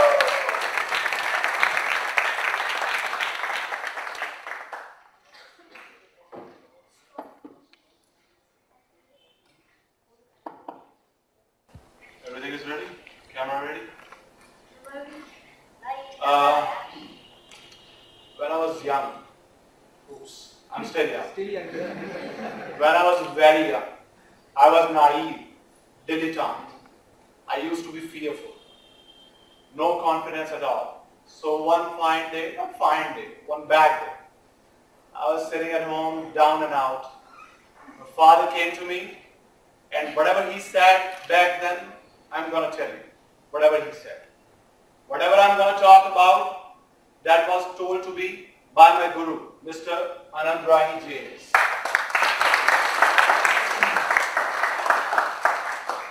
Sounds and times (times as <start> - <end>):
Male speech, man speaking: 12.2 - 13.9, 16.2 - 16.8, 18.4 - 19.3, 20.1 - 22.0, 22.8 - 24.0, 24.6 - 25.5, 26.1 - 26.8, 27.5 - 28.5, 29.8 - 34.2, 35.2 - 37.2, 38.1 - 39.2, 39.9 - 44.2, 45.1 - 46.6, 47.3 - 51.6.